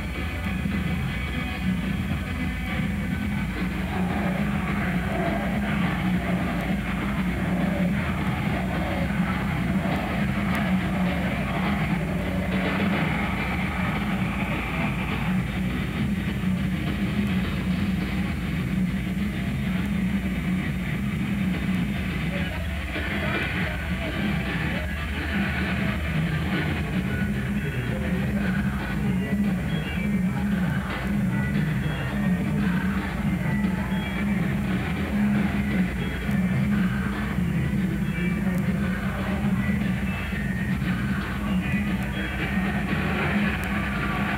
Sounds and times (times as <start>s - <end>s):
Music: 0.0s - 44.3s.